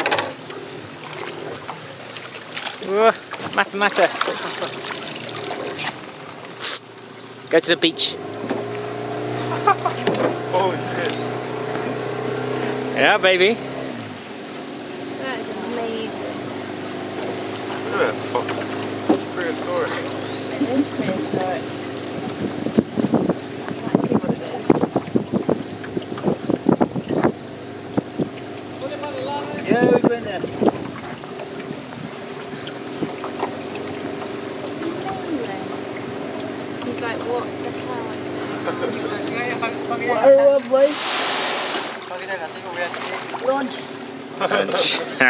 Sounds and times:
Water: 0:00.0 - 0:45.2.

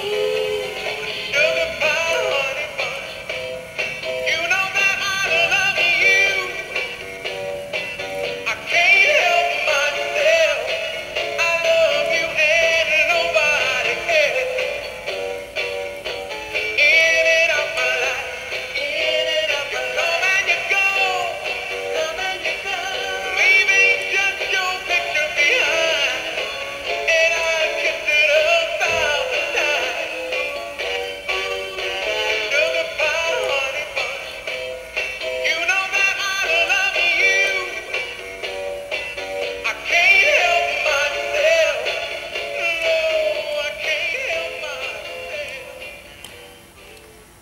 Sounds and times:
Male singing: 0:00.0 - 0:03.2, 0:04.2 - 0:07.0, 0:08.4 - 0:14.9, 0:16.8 - 0:30.6, 0:31.9 - 0:34.5, 0:35.4 - 0:38.1, 0:39.6 - 0:46.0
Music: 0:00.0 - 0:47.4.

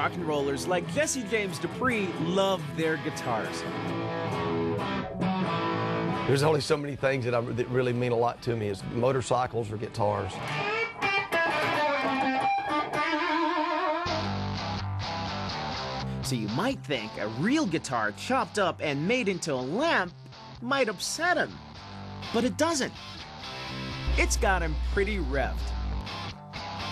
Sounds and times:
Speech: 0:00.0 - 0:03.6, 0:06.3 - 0:10.4, 0:16.2 - 0:21.6, 0:22.3 - 0:23.0, 0:24.1 - 0:25.7
Electric guitar: 0:00.0 - 0:06.6, 0:10.3 - 0:16.3, 0:21.5 - 0:26.9.

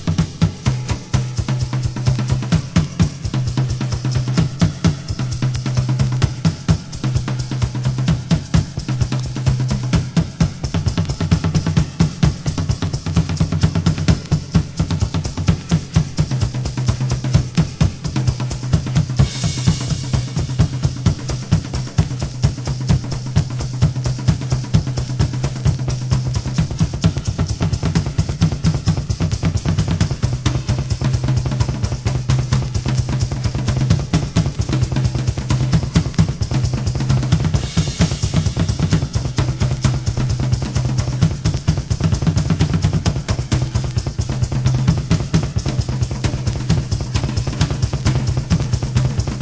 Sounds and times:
Music: 0:00.0 - 0:49.4.

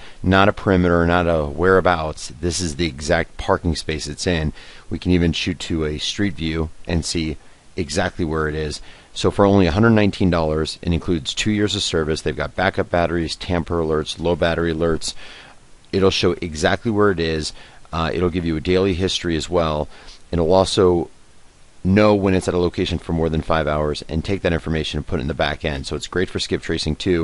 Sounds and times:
Speech: 0:00.2 - 0:15.2, 0:15.9 - 0:21.1, 0:21.8 - 0:27.2.

